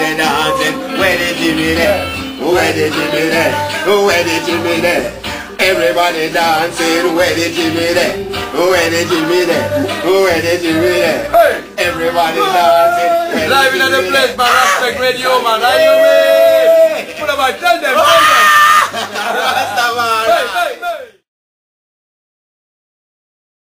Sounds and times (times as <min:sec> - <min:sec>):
Music: 0:00.0 - 0:21.3
Speech: 0:17.1 - 0:18.5.